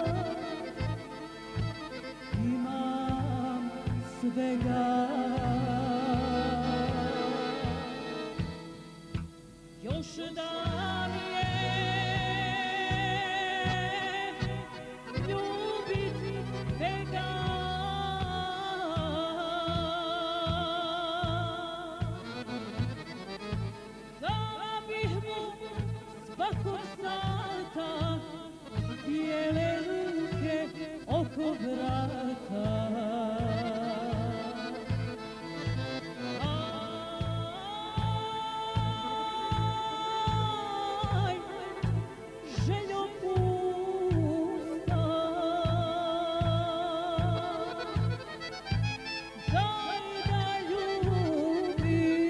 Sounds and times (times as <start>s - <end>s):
Accordion: 0.0s - 52.2s
Folk music: 0.0s - 52.2s.